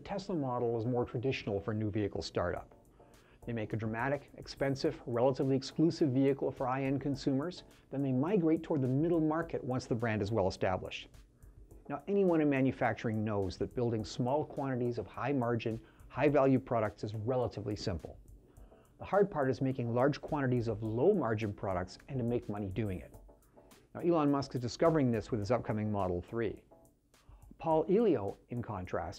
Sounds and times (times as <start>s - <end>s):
Speech: 0.0s - 2.7s, 3.5s - 11.1s, 11.9s - 18.2s, 19.0s - 23.2s, 24.0s - 26.6s, 27.6s - 29.1s.